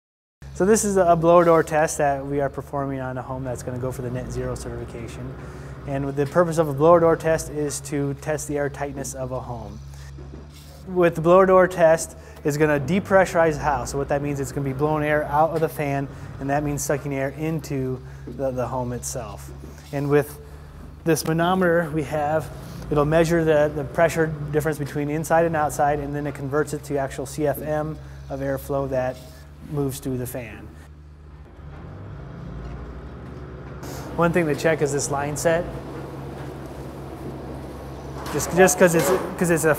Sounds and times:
Speech: 0:00.6 - 0:09.8, 0:10.8 - 0:20.4, 0:21.0 - 0:30.8, 0:34.2 - 0:35.8, 0:38.3 - 0:39.7.

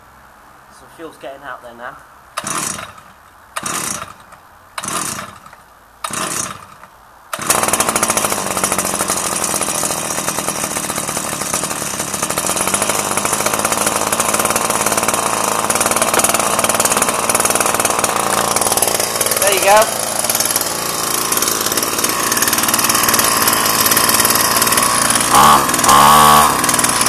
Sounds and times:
Chainsaw: 0:02.4 - 0:27.0
Power tool: 0:02.4 - 0:27.0.

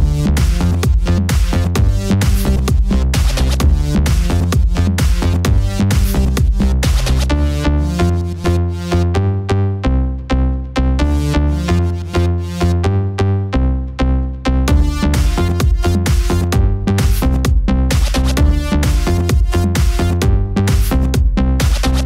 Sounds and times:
Pop music: 0:00.0 - 0:09.2, 0:14.7 - 0:22.0.

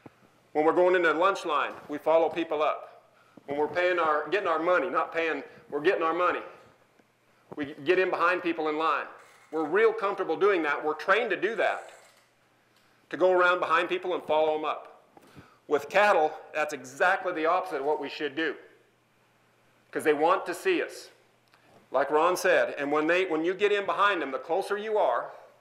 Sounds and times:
Speech: 0:00.6 - 0:06.6, 0:07.6 - 0:11.9, 0:13.1 - 0:15.0, 0:15.7 - 0:18.7, 0:20.0 - 0:21.2, 0:21.9 - 0:25.4.

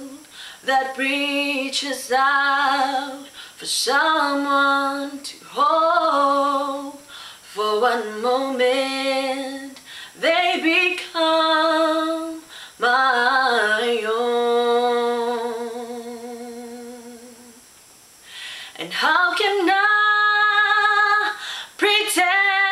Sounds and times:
Female singing: 0:00.0 - 0:17.6, 0:18.8 - 0:22.7.

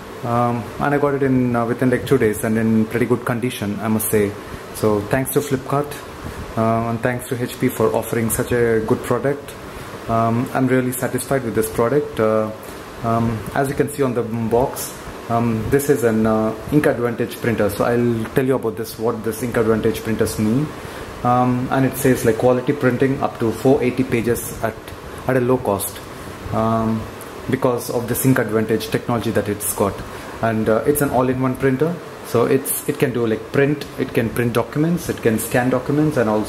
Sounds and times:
Speech: 0:00.2 - 0:36.4.

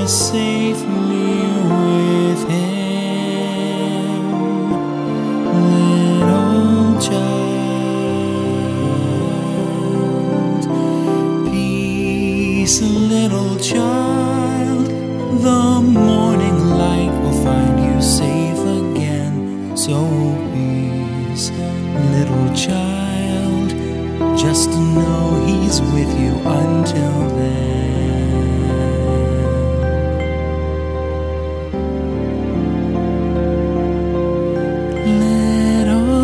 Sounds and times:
Christmas music: 0:00.0 - 0:36.2.

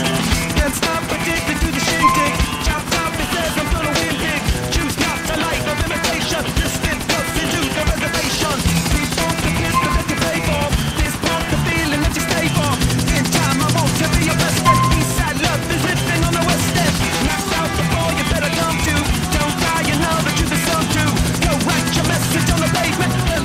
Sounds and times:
Helicopter: 0:00.0 - 0:01.9, 0:02.7 - 0:09.7, 0:16.0 - 0:23.4
Music: 0:01.8 - 0:04.7, 0:09.4 - 0:13.0, 0:14.7 - 0:23.4.

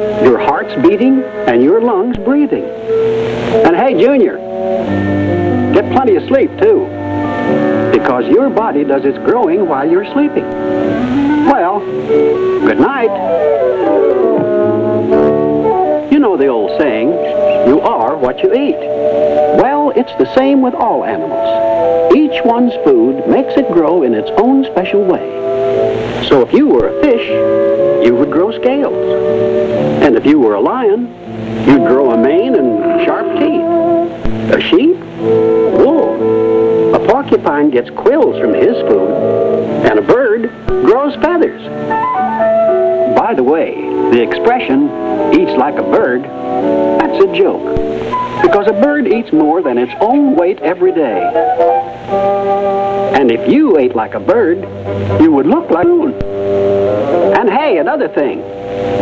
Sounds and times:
Music: 0:00.0 - 0:59.0
Speech: 0:00.2 - 0:02.7, 0:03.6 - 0:04.4, 0:05.7 - 0:06.9, 0:07.9 - 0:10.4, 0:11.4 - 0:11.8, 0:12.6 - 0:13.3, 0:16.1 - 0:18.9, 0:19.5 - 0:25.3, 0:26.2 - 0:27.4, 0:28.0 - 0:29.2, 0:30.0 - 0:31.1, 0:31.7 - 0:33.6, 0:34.5 - 0:35.0, 0:35.7 - 0:36.2, 0:36.9 - 0:39.1, 0:39.8 - 0:41.7, 0:43.1 - 0:46.3, 0:47.0 - 0:47.7, 0:48.4 - 0:51.4, 0:53.1 - 0:56.2, 0:57.3 - 0:58.4.

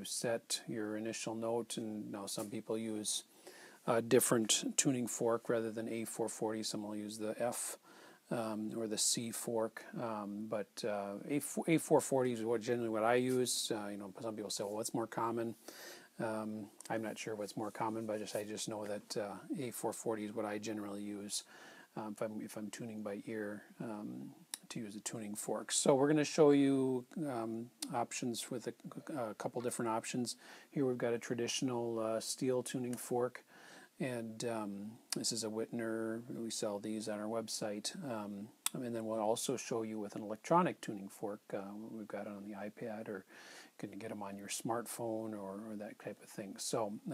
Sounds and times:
Speech: 0:00.0 - 0:15.6, 0:16.2 - 0:47.1.

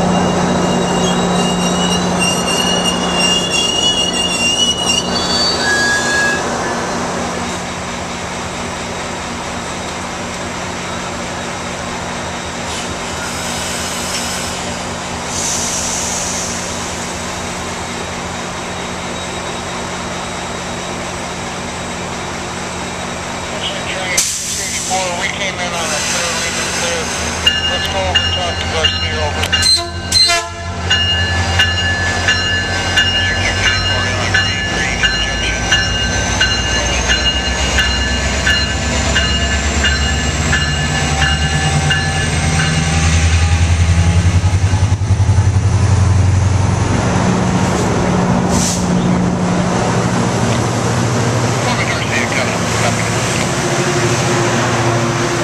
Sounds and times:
Railroad car, train wagon: 0:00.0 - 0:55.4
Train: 0:00.0 - 0:55.4
Speech: 0:23.5 - 0:27.1, 0:27.7 - 0:29.4, 0:33.3 - 0:35.7, 0:51.6 - 0:53.5.

